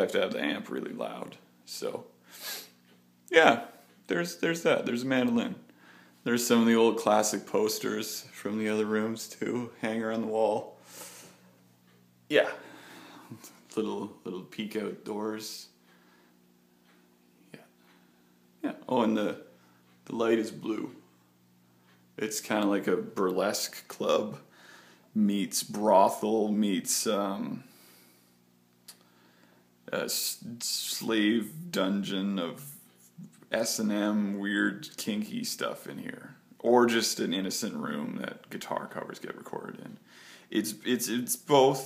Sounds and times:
Speech: 0.0 - 2.1, 3.3 - 10.8, 12.3 - 12.6, 13.7 - 15.8, 18.6 - 21.1, 22.2 - 24.5, 25.1 - 27.7, 29.9 - 41.8
Inside, small room: 0.0 - 41.8.

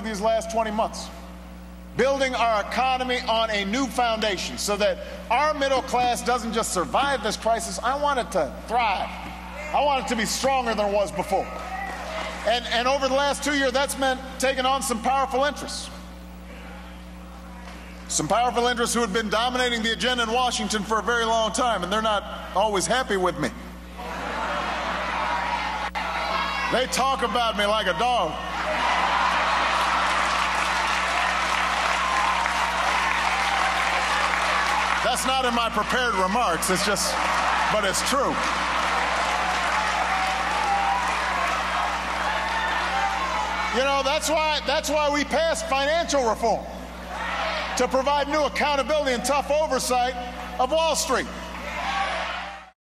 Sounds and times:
Speech: 0.0 - 1.1, 2.0 - 11.6, 12.5 - 16.0, 18.1 - 23.6, 26.7 - 28.4, 35.1 - 38.5, 43.8 - 46.7, 47.8 - 51.4.

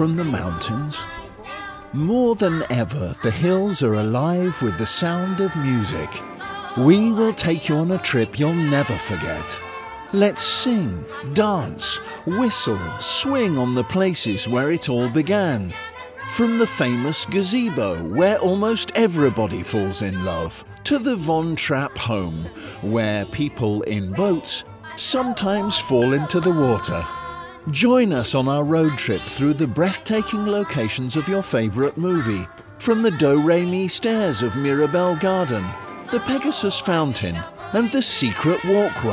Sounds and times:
Speech: 0.0 - 1.1, 2.0 - 6.2, 6.8 - 9.6, 10.2 - 39.1
Music: 0.0 - 39.1.

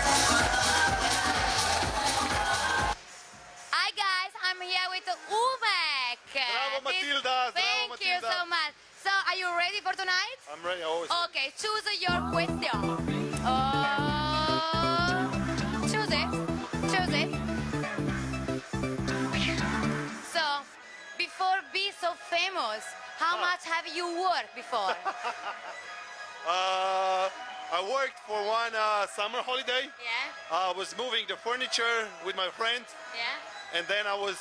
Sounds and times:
Music: 0.0 - 3.8, 12.1 - 29.5.

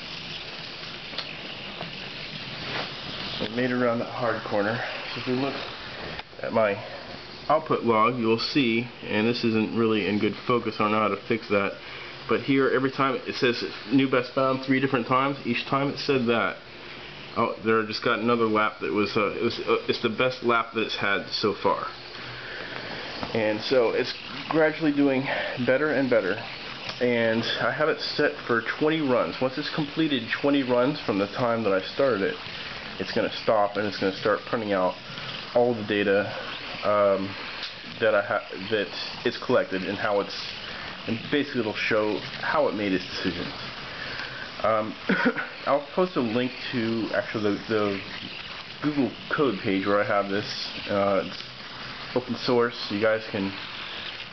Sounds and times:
Inside, small room: 0.0 - 54.3
Speech: 3.4 - 5.6, 6.4 - 16.6, 17.4 - 22.0, 23.3 - 43.6, 44.6 - 48.1, 48.8 - 51.4, 52.1 - 53.6.

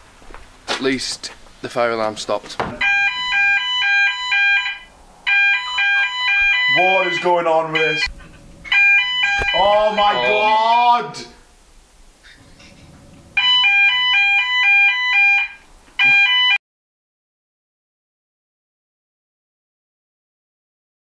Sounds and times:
Speech: 0.7 - 2.7, 6.7 - 8.1, 9.6 - 11.4
Smoke detector, smoke alarm: 2.8 - 8.1, 8.7 - 10.7, 13.4 - 16.6.

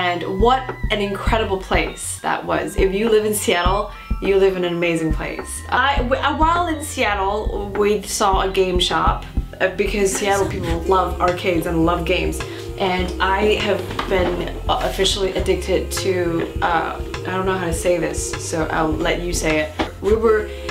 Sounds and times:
Speech: 0.0 - 20.5
Music: 0.0 - 20.7.

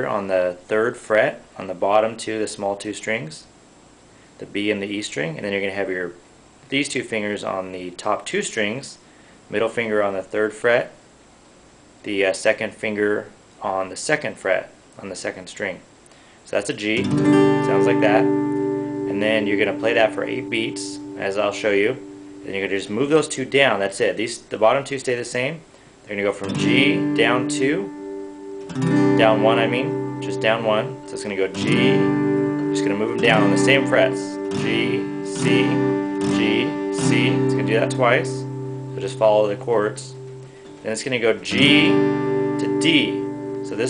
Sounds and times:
Speech: 0.0 - 3.6, 4.4 - 11.0, 12.0 - 18.3, 19.1 - 27.9, 29.2 - 32.1, 32.8 - 40.2, 40.8 - 42.0, 42.6 - 43.9
Strum: 16.9 - 23.2, 26.4 - 43.9
Acoustic guitar: 17.0 - 23.2, 25.7 - 43.9.

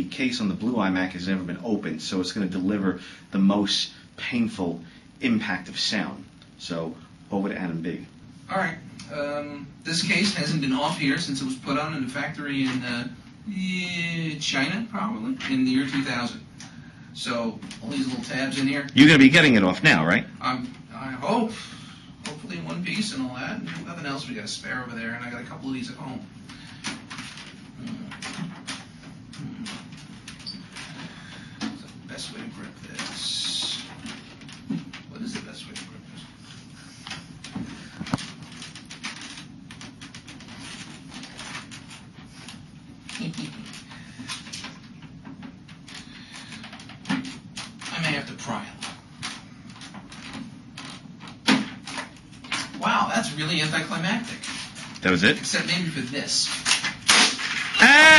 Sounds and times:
Male speech, man speaking: 0.0 - 16.4, 17.2 - 21.6, 22.3 - 26.3, 32.1 - 33.9, 35.1 - 36.2, 47.9 - 48.8, 52.8 - 56.6.

